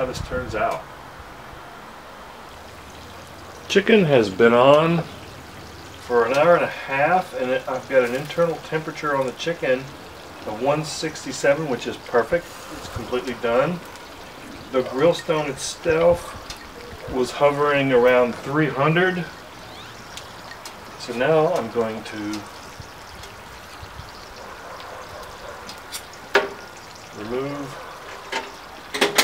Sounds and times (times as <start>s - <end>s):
Speech: 0.0s - 0.9s, 3.7s - 5.1s, 6.1s - 13.8s, 14.7s - 16.3s, 17.1s - 19.3s, 21.0s - 22.5s, 27.2s - 27.8s
Boiling: 0.0s - 29.2s.